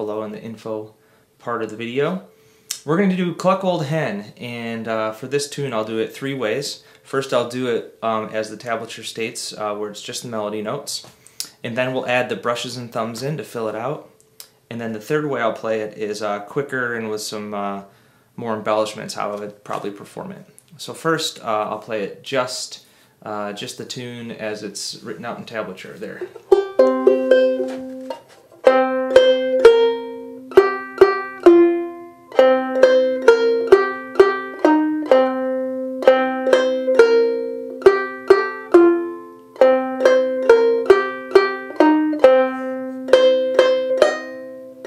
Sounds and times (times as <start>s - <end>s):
Speech: 0.0s - 14.1s, 14.7s - 26.4s
Music: 26.5s - 44.8s.